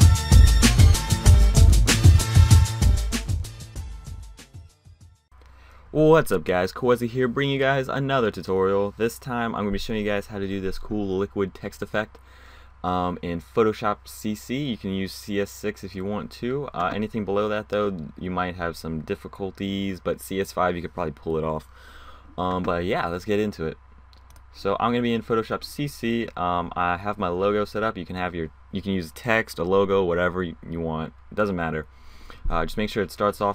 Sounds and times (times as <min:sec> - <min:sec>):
Speech: 0:06.0 - 0:12.2, 0:12.8 - 0:21.7, 0:22.4 - 0:23.8, 0:24.5 - 0:31.9, 0:32.5 - 0:33.5.